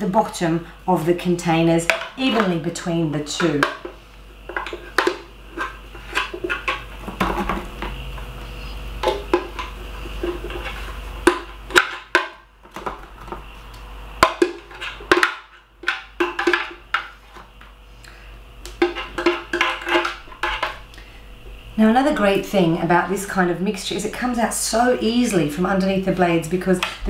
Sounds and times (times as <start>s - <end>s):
Inside, small room: 0.0s - 27.0s.